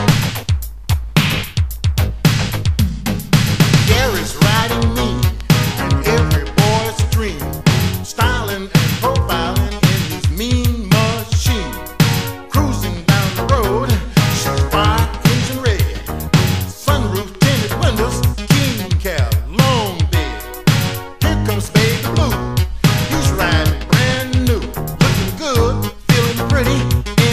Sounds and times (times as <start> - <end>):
Soundtrack music: 2.0 - 10.2, 19.6 - 27.3.